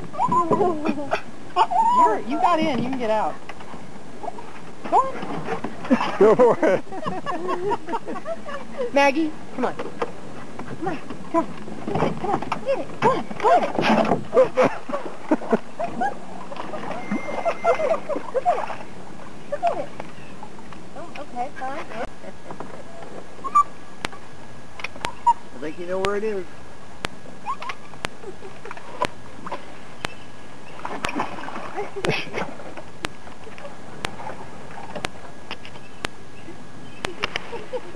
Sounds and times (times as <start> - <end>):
Stream: 0.0 - 37.9.